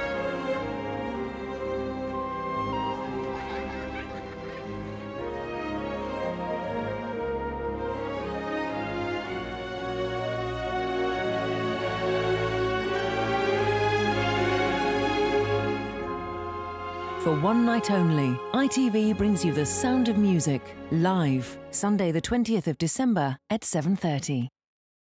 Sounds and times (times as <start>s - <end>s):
Tender music: 0.0s - 22.3s
Speech: 17.2s - 24.6s.